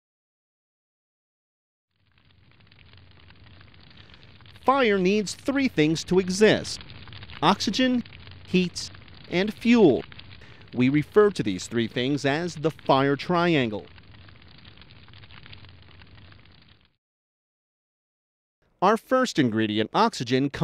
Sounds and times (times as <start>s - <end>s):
Fire: 1.9s - 17.0s.